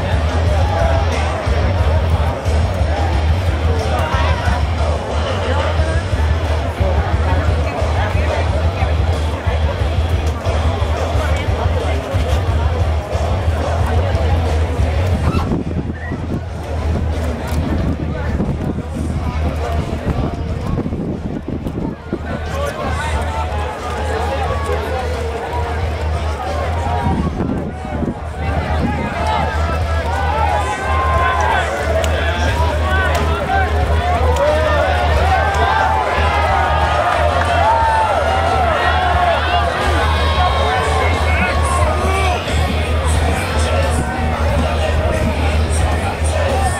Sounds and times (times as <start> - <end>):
Music: 0.0 - 46.8
Speech: 0.0 - 46.8.